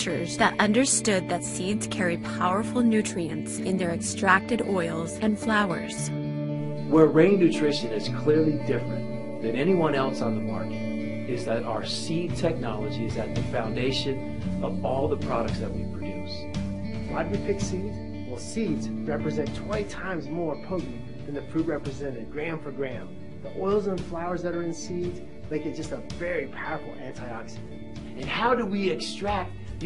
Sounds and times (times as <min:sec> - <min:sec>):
Speech: 0:00.0 - 0:06.1, 0:06.9 - 0:10.7, 0:11.3 - 0:16.4, 0:17.1 - 0:29.8
Music: 0:00.0 - 0:29.8.